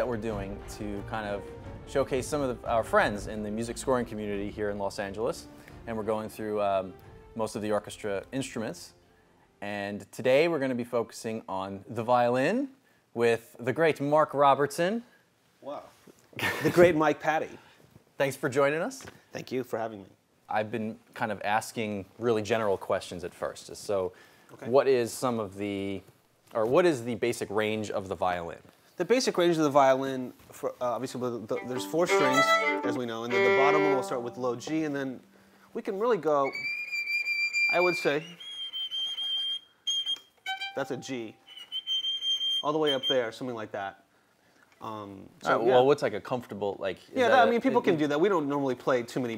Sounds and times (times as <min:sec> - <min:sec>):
Speech: 0:00.0 - 0:08.9, 0:09.6 - 0:15.9, 0:16.7 - 0:17.6, 0:18.2 - 0:35.2, 0:35.8 - 0:36.6, 0:37.7 - 0:38.4, 0:42.6 - 0:44.0, 0:44.8 - 0:49.3.